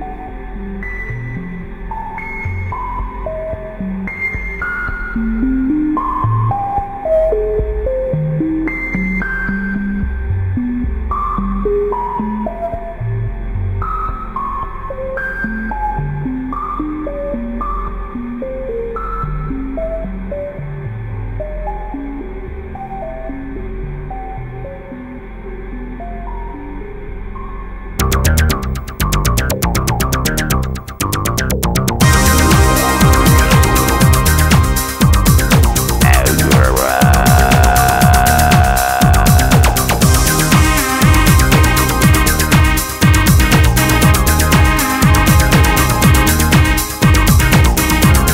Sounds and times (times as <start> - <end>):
Music: 0.0 - 48.3.